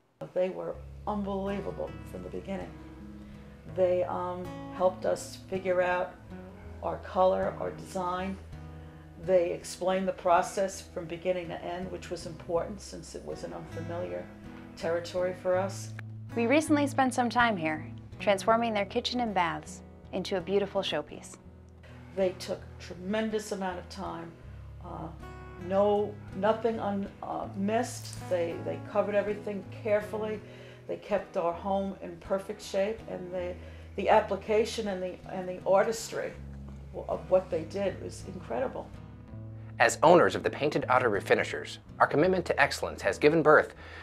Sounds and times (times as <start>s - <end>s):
Music: 0.0s - 44.0s.